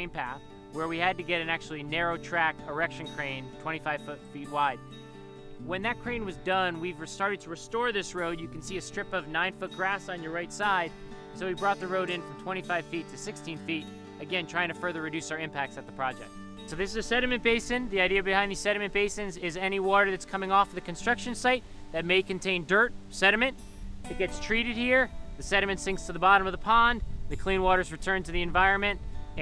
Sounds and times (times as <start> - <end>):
Speech: 0.0 - 4.8, 5.6 - 23.5, 24.1 - 29.4
Music: 0.0 - 29.4
Rustling leaves: 13.8 - 29.4.